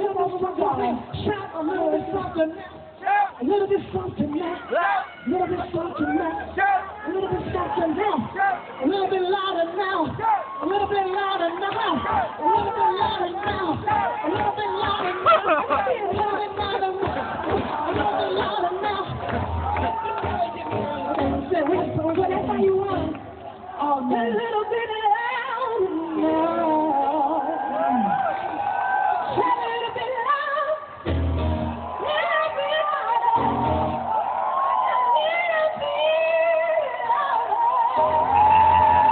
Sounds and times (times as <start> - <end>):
Music: 10.8 - 23.4, 31.0 - 32.6, 33.2 - 34.1, 37.9 - 39.1.